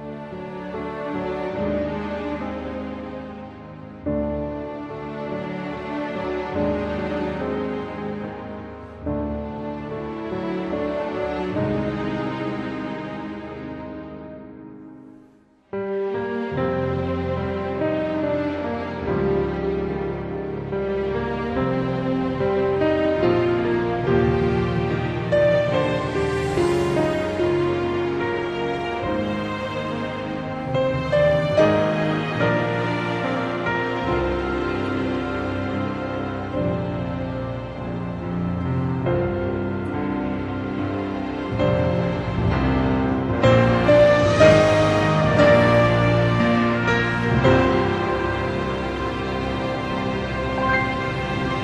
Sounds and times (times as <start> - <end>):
Music: 0.0 - 51.6.